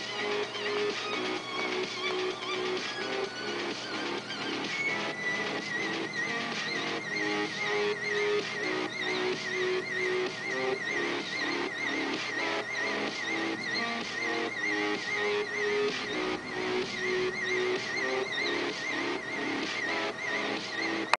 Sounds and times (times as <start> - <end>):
Music: 0.0 - 21.1.